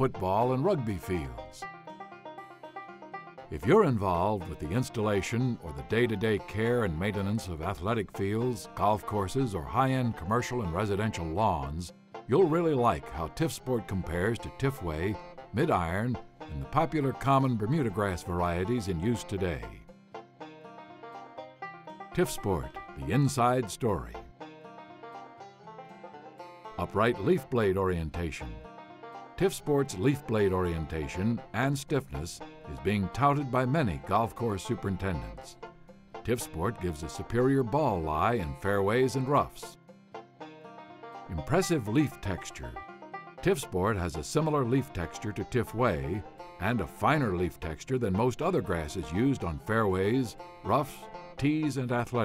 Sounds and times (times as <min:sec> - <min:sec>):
Speech: 0:00.0 - 0:01.7, 0:03.6 - 0:19.8, 0:22.2 - 0:24.3, 0:26.8 - 0:28.6, 0:29.4 - 0:35.6, 0:36.3 - 0:39.8, 0:41.3 - 0:42.8, 0:43.4 - 0:52.2
Music: 0:00.0 - 0:52.2.